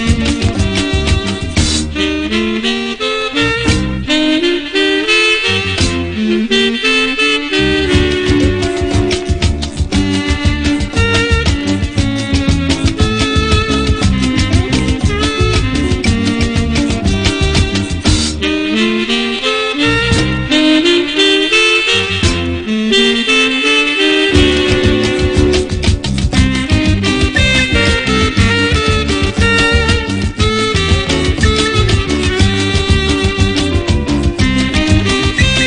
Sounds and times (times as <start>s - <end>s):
Background music: 0.0s - 35.6s
Folk music: 0.0s - 35.6s.